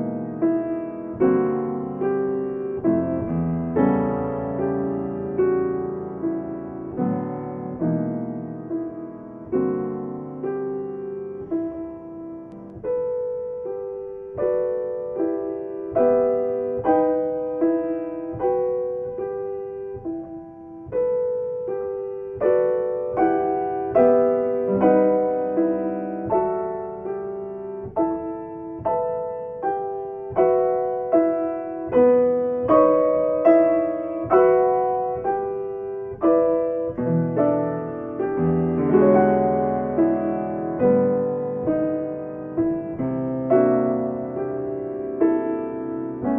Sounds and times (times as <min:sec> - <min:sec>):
Electric piano: 0:00.0 - 0:46.3.